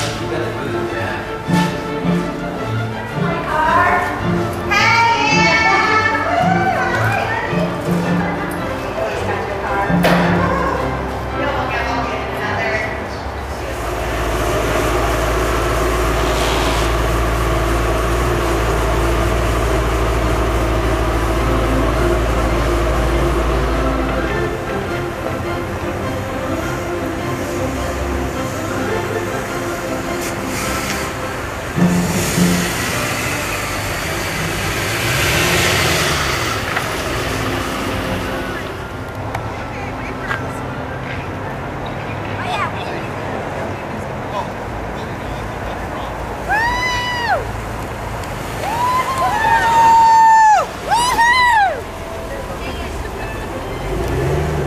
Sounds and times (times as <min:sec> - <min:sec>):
Music: 0:00.0 - 0:16.4, 0:17.0 - 0:42.3.